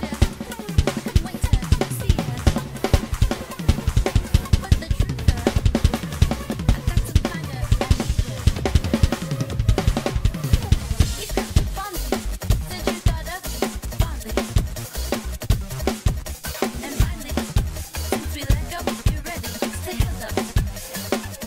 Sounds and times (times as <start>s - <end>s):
Bass drum: 0.0s - 21.4s
Drum kit: 0.0s - 21.4s.